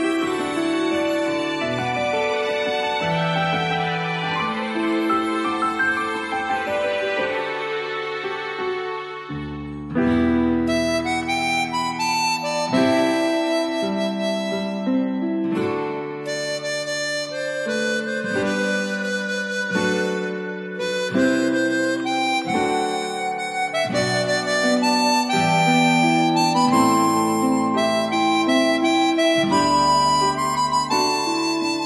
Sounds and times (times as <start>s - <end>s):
Music: 0.0s - 31.8s.